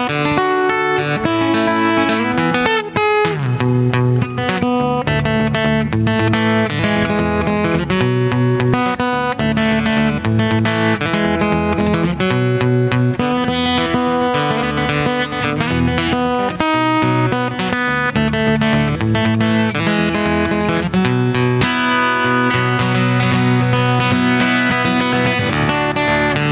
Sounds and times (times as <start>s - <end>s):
Acoustic guitar: 0.0s - 26.5s
Electric guitar: 0.0s - 26.5s
Strum: 0.0s - 26.5s.